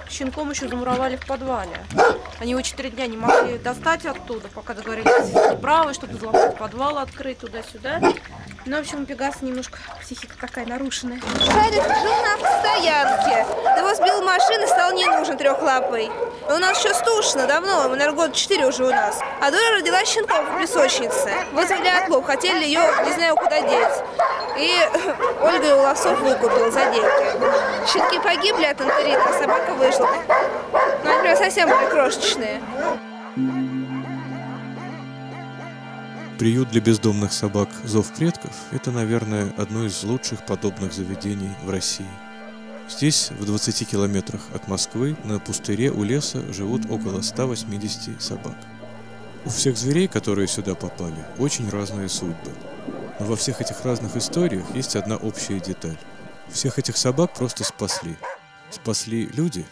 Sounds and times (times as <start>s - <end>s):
Dog: 1.9s - 2.4s, 3.2s - 4.4s, 5.0s - 5.7s, 6.3s - 6.6s, 8.0s - 8.6s, 11.7s - 17.9s, 18.8s - 34.2s, 57.6s - 58.4s
Speech: 2.4s - 24.0s, 24.6s - 30.2s, 31.0s - 32.6s, 42.9s - 48.6s, 53.2s - 59.7s.